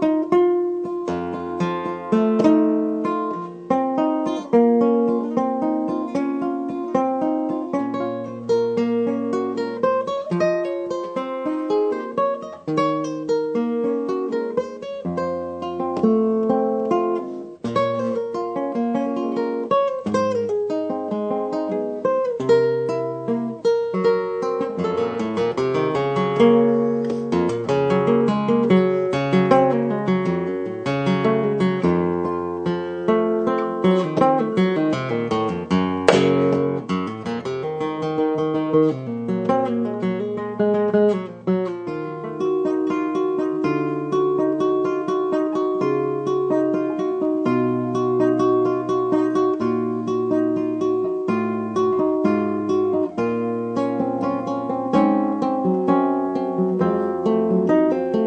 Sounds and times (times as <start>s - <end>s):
Guitar: 0.0s - 58.2s
Music of Latin America: 36.1s - 36.7s.